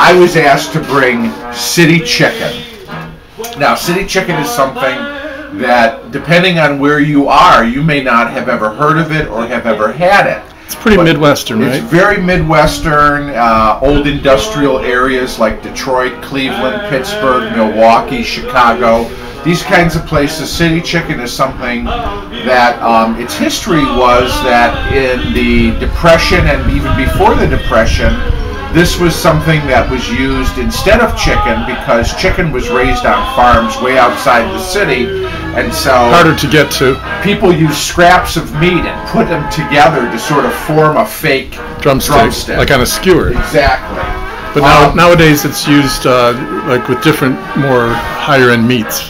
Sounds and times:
Speech: 0.0 - 44.0, 44.6 - 49.0
Music: 0.0 - 49.0.

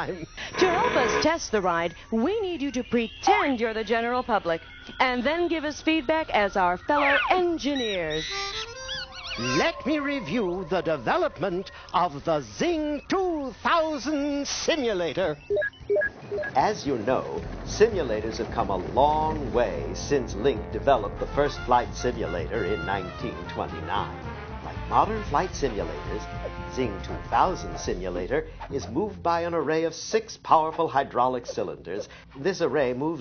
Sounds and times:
Speech: 0.0 - 8.2, 9.4 - 15.4, 16.6 - 24.2, 24.9 - 33.2
Music: 5.7 - 9.7, 16.4 - 29.6.

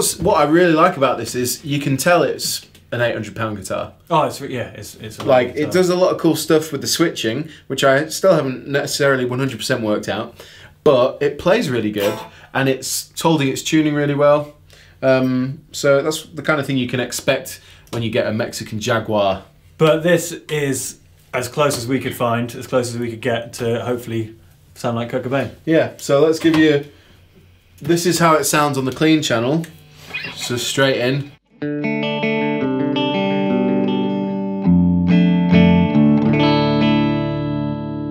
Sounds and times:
Speech: 0.0 - 26.9, 27.8 - 31.4
Inside, small room: 0.0 - 38.1
Guitar: 11.2 - 16.2, 27.8 - 38.1.

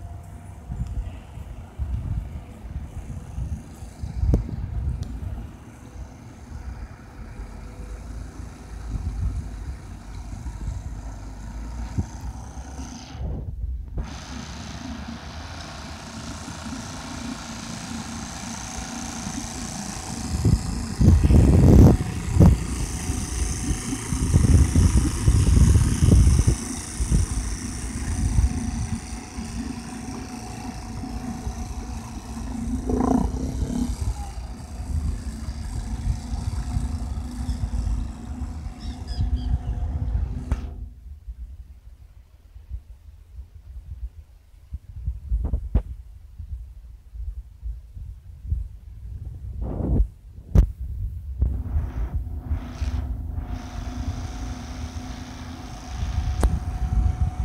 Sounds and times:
Motorboat, speedboat: 0.0 - 41.0, 51.4 - 57.4.

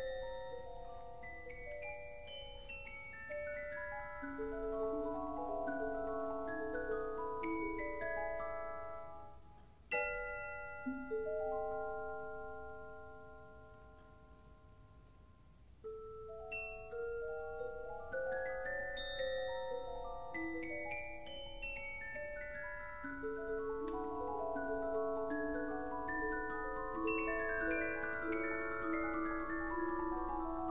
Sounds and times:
Marimba, xylophone: 0.0 - 30.7.

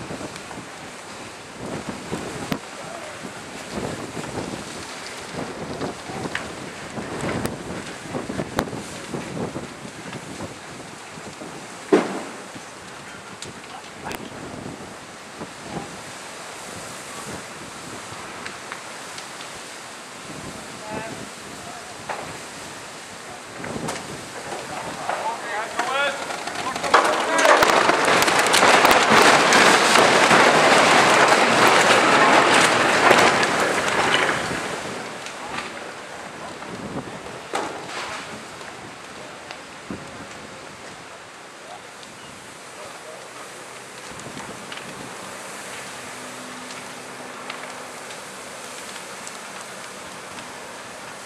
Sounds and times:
Speech: 2.8 - 3.3, 13.0 - 14.3, 20.5 - 22.1, 24.4 - 27.5, 42.8 - 43.6.

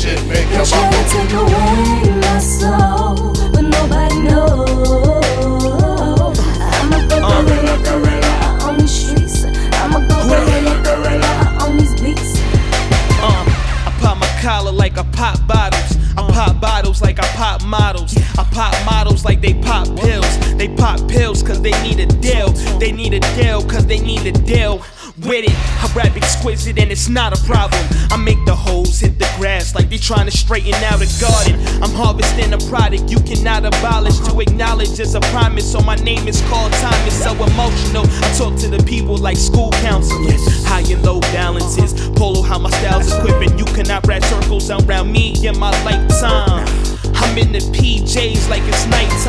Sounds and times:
Music: 0.0 - 49.2.

